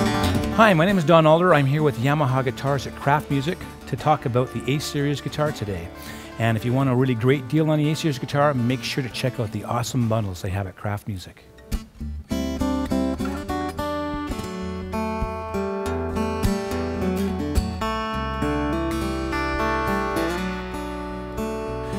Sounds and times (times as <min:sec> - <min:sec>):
Acoustic guitar: 0:00.0 - 0:21.9.